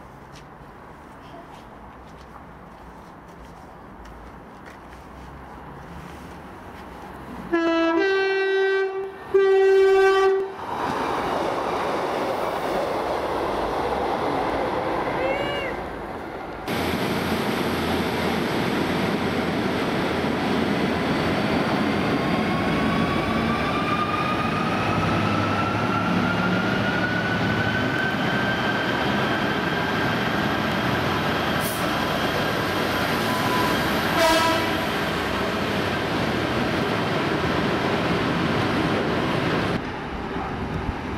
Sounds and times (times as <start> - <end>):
Vehicle: 0.0 - 11.3.